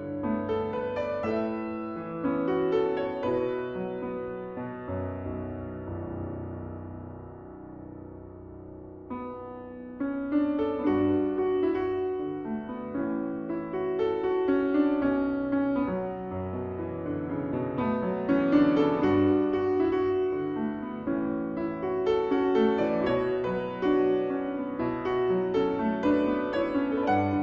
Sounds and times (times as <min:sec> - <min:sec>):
Piano: 0:00.0 - 0:27.4.